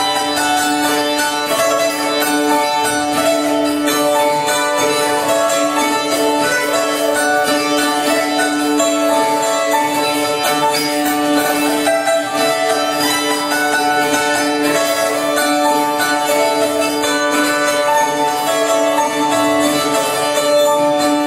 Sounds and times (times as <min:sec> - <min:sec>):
Zither: 0:00.0 - 0:21.2.